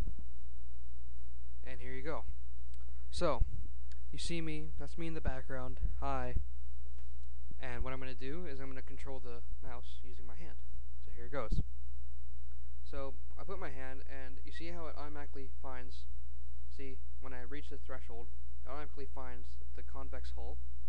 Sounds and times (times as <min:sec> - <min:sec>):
Speech: 0:01.6 - 0:02.3, 0:03.1 - 0:03.5, 0:04.1 - 0:06.4, 0:07.6 - 0:11.6, 0:12.9 - 0:16.1, 0:16.7 - 0:20.6.